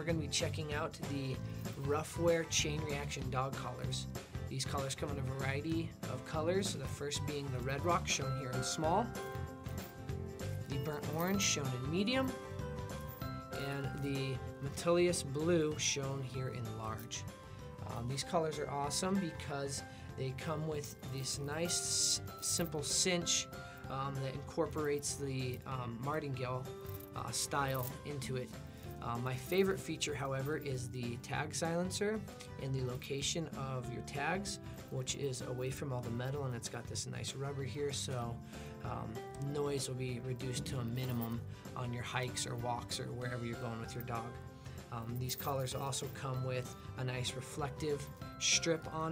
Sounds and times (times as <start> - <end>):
Speech: 0.0 - 9.2, 10.7 - 12.4, 13.6 - 17.2, 17.8 - 49.1
Music: 0.0 - 49.1.